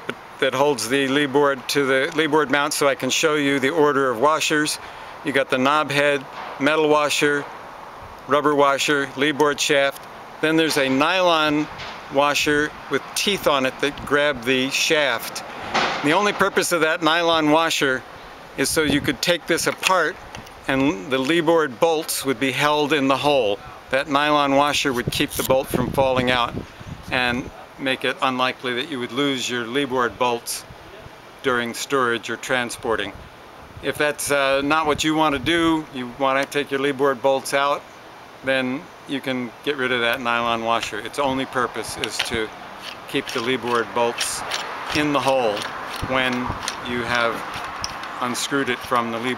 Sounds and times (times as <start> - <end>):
Speech: 0.4 - 7.5, 8.3 - 15.4, 16.0 - 18.0, 18.6 - 26.5, 27.1 - 33.2, 33.8 - 37.8, 38.4 - 42.5, 43.1 - 47.4, 48.2 - 49.3.